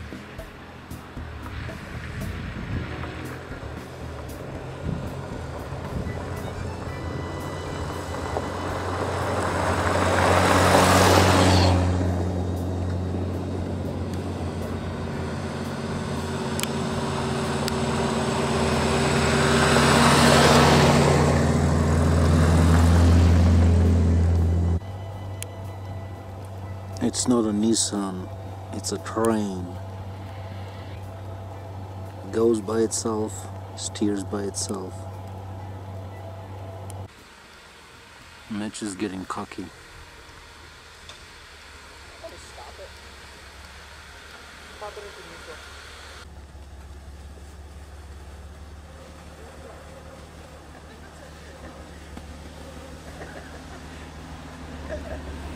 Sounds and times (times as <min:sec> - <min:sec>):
Car: 0:00.0 - 0:55.5
Outside, rural or natural: 0:00.0 - 0:55.5
Truck: 0:00.0 - 0:55.5.